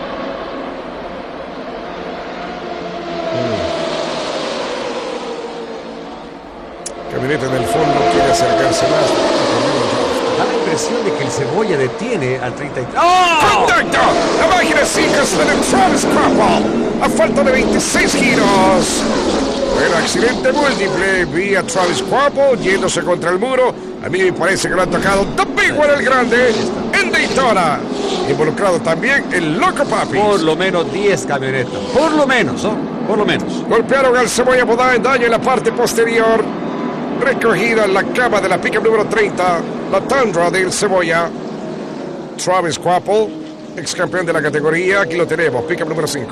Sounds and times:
Car: 0.0 - 46.3
Speech: 3.4 - 3.7, 7.1 - 19.0, 19.8 - 36.5, 37.2 - 41.3, 42.4 - 46.3.

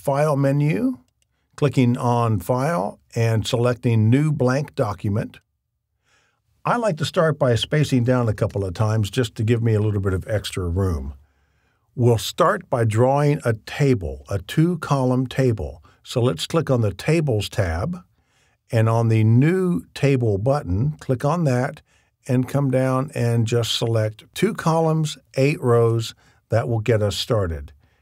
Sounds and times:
Speech: 0.0 - 5.4, 6.6 - 11.2, 12.0 - 18.1, 18.7 - 27.8.

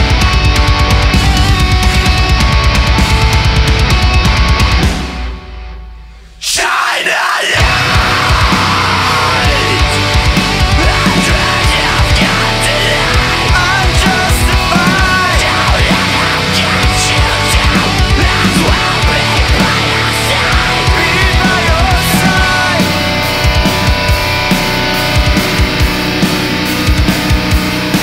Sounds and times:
Rhythm and blues: 0.0 - 5.8, 7.6 - 28.0
Blues: 0.0 - 28.0.

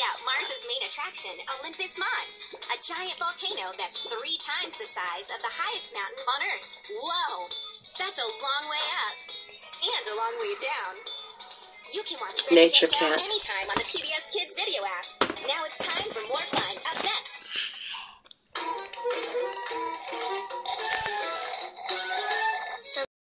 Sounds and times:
Music: 0.0 - 23.1
Speech: 12.0 - 14.1.

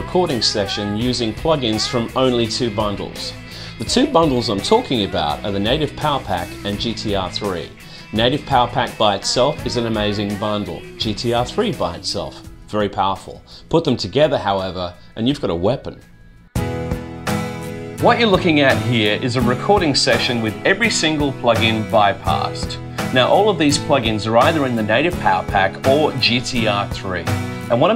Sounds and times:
Speech: 0.0 - 16.0, 18.0 - 27.9
Music: 0.0 - 27.9.

